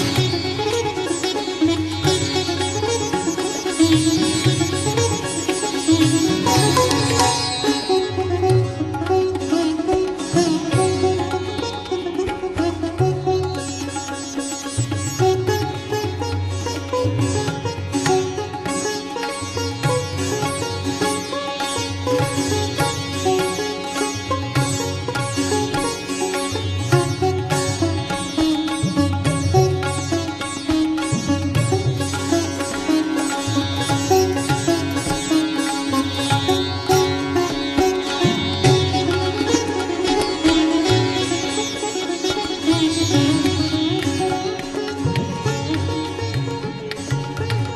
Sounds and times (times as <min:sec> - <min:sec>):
Sitar: 0:00.0 - 0:47.7.